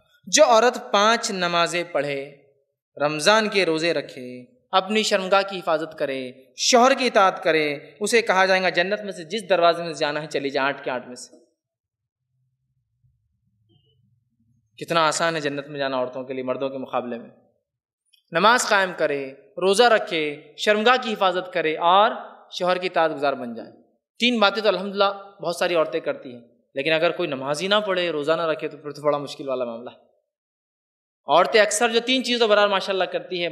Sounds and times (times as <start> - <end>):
Speech: 0.3 - 2.4, 3.0 - 11.4, 14.8 - 17.3, 18.3 - 30.0, 31.3 - 33.5.